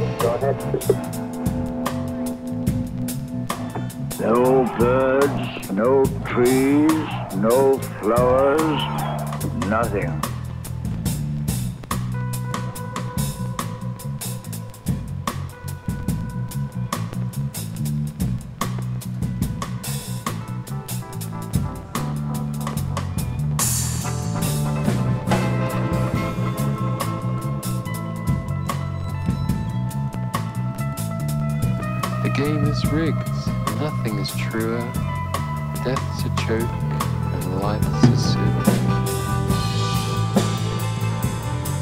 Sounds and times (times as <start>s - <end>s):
Speech: 0.0s - 1.0s, 4.2s - 10.3s, 32.2s - 35.0s, 35.8s - 38.8s
Music: 0.0s - 41.8s.